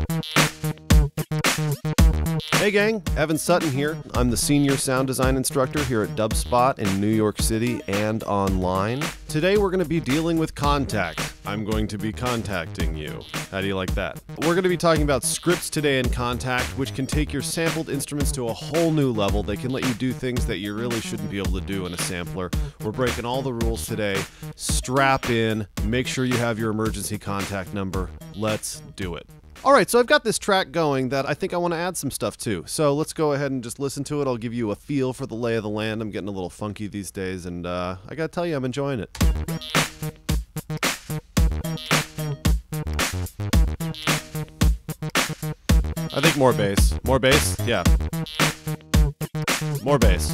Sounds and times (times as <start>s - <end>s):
Music: 0.0s - 30.0s, 39.2s - 50.3s
Speech: 2.6s - 39.2s, 46.1s - 48.0s, 49.8s - 50.3s.